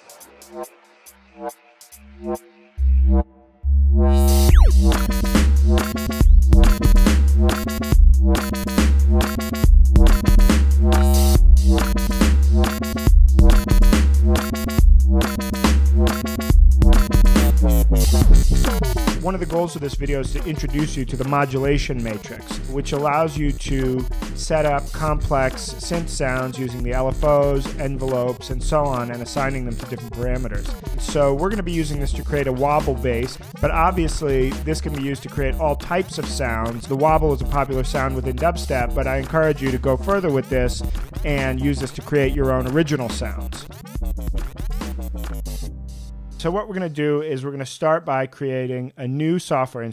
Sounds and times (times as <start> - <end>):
Dubstep: 4.1 - 45.8.